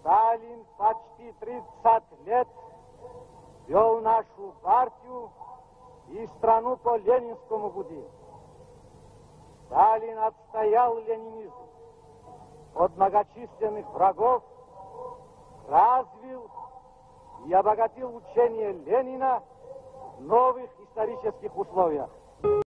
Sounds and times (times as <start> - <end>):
Male speech, man speaking: 0.0 - 2.6, 3.7 - 5.3, 6.1 - 8.1, 9.7 - 11.6, 12.8 - 14.4, 15.7 - 16.6, 17.4 - 19.5, 20.1 - 22.2.